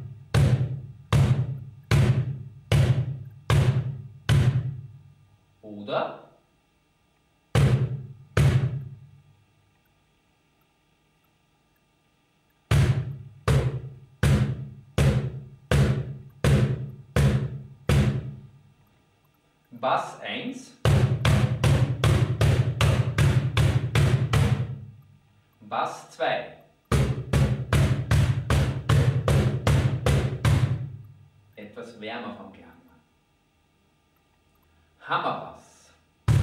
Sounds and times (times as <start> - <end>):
Speech: 5.6 - 6.4, 19.7 - 20.8, 25.6 - 26.6, 31.6 - 32.9, 35.0 - 36.0.